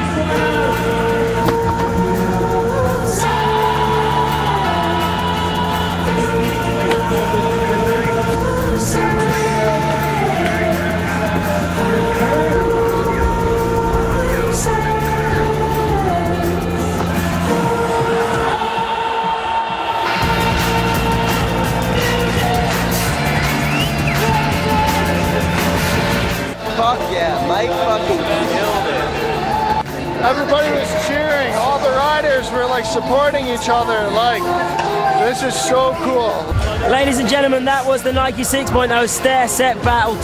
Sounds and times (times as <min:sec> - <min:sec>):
Inside, public space: 0:00.0 - 0:40.2
Music: 0:00.0 - 0:40.2
Speech: 0:35.2 - 0:40.2.